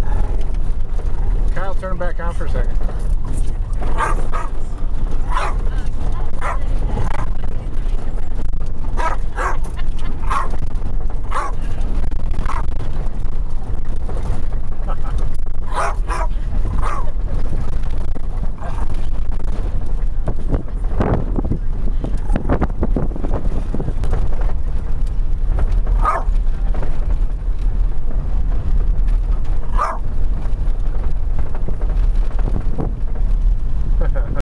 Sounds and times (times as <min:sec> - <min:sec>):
Bow-wow: 0:04.0 - 0:04.6, 0:05.3 - 0:05.6, 0:06.4 - 0:06.6, 0:09.0 - 0:09.6, 0:10.3 - 0:10.6, 0:11.3 - 0:11.6, 0:15.7 - 0:17.1, 0:26.0 - 0:26.3, 0:29.7 - 0:30.0.